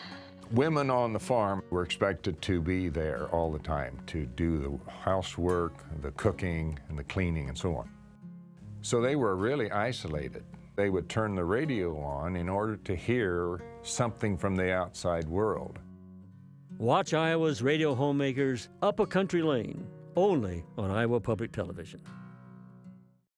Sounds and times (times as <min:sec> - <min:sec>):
Speech: 0:00.5 - 0:07.9, 0:08.8 - 0:15.8, 0:16.8 - 0:22.0.